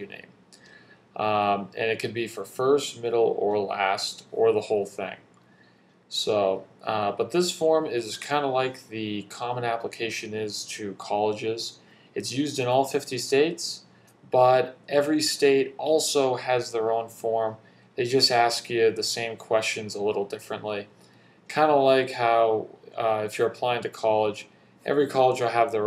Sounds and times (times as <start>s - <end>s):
Speech: 0.0s - 0.4s, 1.2s - 5.3s, 6.1s - 25.8s.